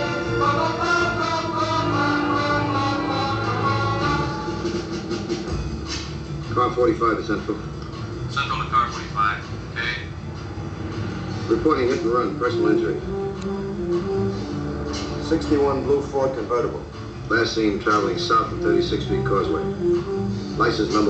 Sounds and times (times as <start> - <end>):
Music: 0.0 - 21.0
Speech: 6.5 - 7.6, 8.3 - 10.1, 11.5 - 13.0, 15.3 - 19.6, 20.6 - 21.0
Motor vehicle (road): 7.2 - 21.0.